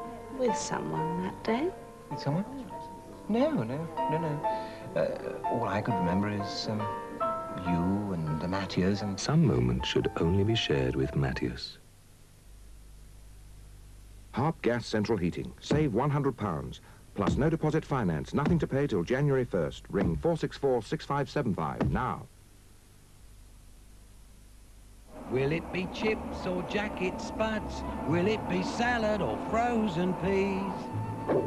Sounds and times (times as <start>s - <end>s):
Speech: 0.4s - 6.9s, 7.6s - 11.8s, 14.4s - 22.3s, 25.3s - 27.8s.